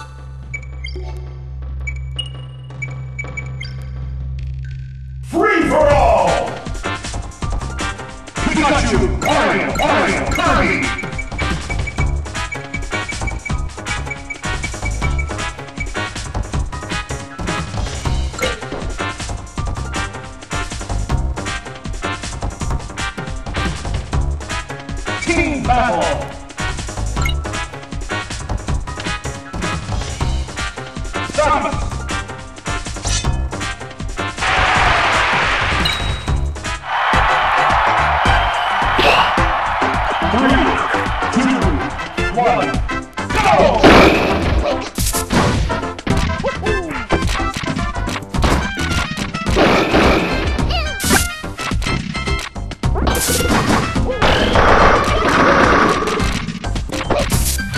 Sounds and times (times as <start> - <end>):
Music: 0.0 - 57.7
Speech: 5.3 - 6.6, 8.4 - 10.9, 25.3 - 26.3, 31.4 - 31.8, 40.3 - 40.8, 41.4 - 42.8.